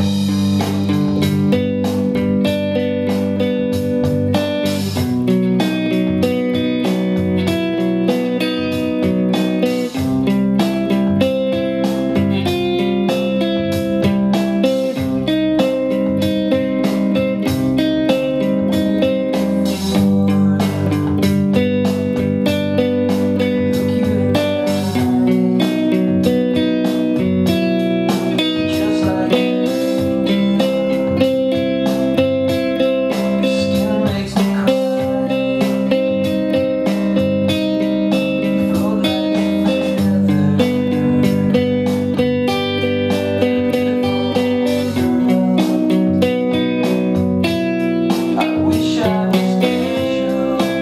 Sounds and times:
Acoustic guitar: 0:00.0 - 0:50.8
Electric guitar: 0:00.0 - 0:50.8
Strum: 0:00.0 - 0:50.8.

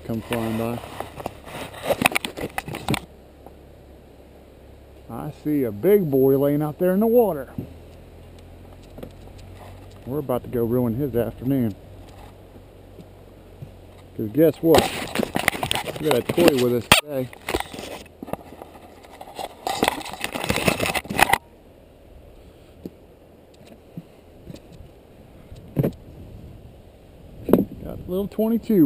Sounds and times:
Speech: 0:00.0 - 0:00.8, 0:05.1 - 0:07.6, 0:10.1 - 0:11.8, 0:14.2 - 0:14.9, 0:16.0 - 0:17.3, 0:27.8 - 0:28.8
Outside, rural or natural: 0:00.0 - 0:28.8.

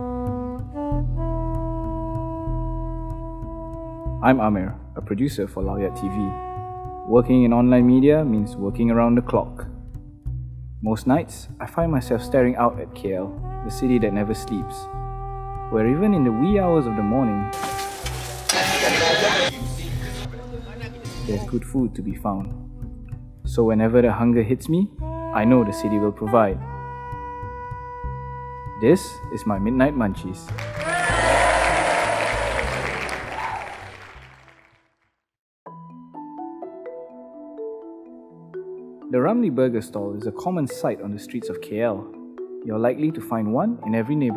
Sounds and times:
Music: 0:00.0 - 0:44.3
Speech: 0:04.2 - 0:06.4, 0:07.1 - 0:09.7, 0:10.8 - 0:14.8, 0:15.7 - 0:17.5, 0:18.5 - 0:22.5, 0:23.5 - 0:26.6, 0:28.8 - 0:30.5, 0:39.2 - 0:42.1, 0:42.7 - 0:44.3.

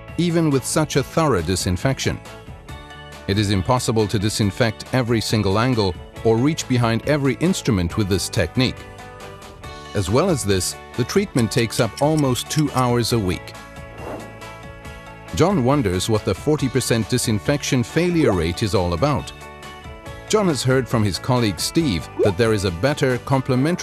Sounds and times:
Music: 0:00.0 - 0:23.8
Speech: 0:00.2 - 0:02.2, 0:03.3 - 0:08.8, 0:10.0 - 0:13.5, 0:15.4 - 0:19.3, 0:20.3 - 0:23.8.

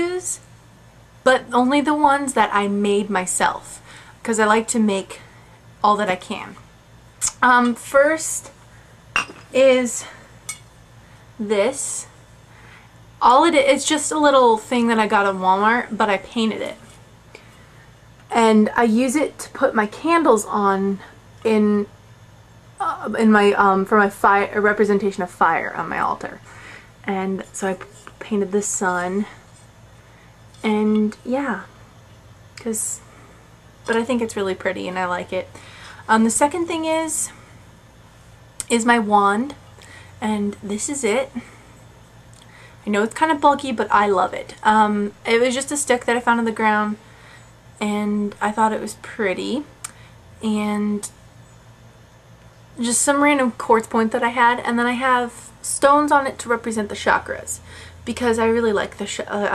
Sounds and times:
Speech: 0:00.0 - 0:00.5, 0:01.3 - 0:05.2, 0:05.8 - 0:06.6, 0:07.2 - 0:08.5, 0:09.5 - 0:10.2, 0:11.4 - 0:12.2, 0:13.2 - 0:16.8, 0:18.3 - 0:21.9, 0:22.8 - 0:29.4, 0:30.6 - 0:31.7, 0:32.6 - 0:33.0, 0:33.9 - 0:37.4, 0:38.6 - 0:39.6, 0:40.2 - 0:41.5, 0:42.8 - 0:47.0, 0:47.8 - 0:49.7, 0:50.4 - 0:51.1, 0:52.8 - 0:59.5.

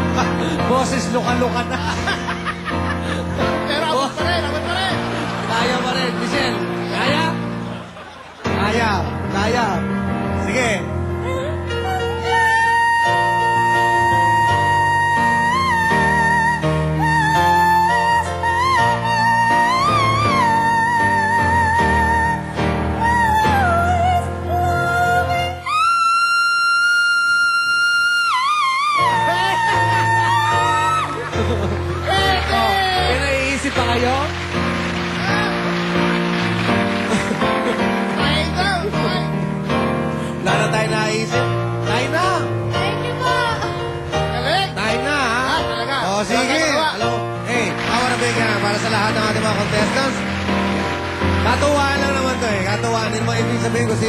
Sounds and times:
Inside, public space: 0:00.0 - 0:54.0
Music: 0:00.0 - 0:54.0.

